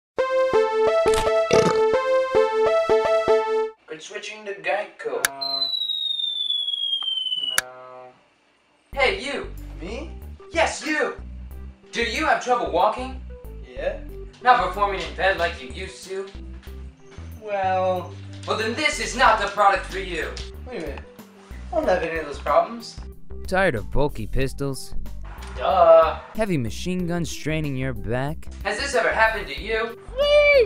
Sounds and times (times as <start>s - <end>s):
Music: 0.2s - 3.8s, 8.8s - 30.6s
Speech: 3.9s - 5.4s, 9.0s - 11.2s, 12.0s - 16.3s, 17.6s - 21.0s, 21.8s - 24.9s, 25.6s - 29.9s.